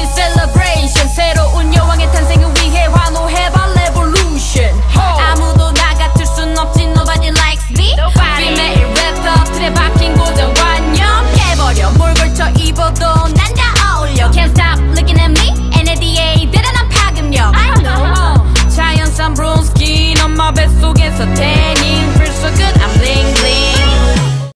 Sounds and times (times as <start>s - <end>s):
Music: 0.0s - 24.5s.